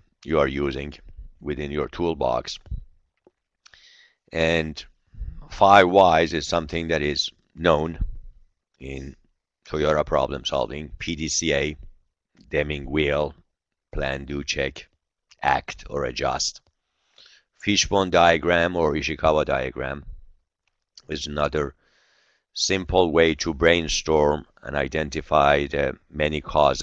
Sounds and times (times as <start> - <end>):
Speech: 0.2 - 2.8, 4.4 - 8.1, 8.8 - 11.9, 12.5 - 13.4, 14.0 - 16.6, 17.6 - 20.1, 21.0 - 21.8, 22.6 - 26.8.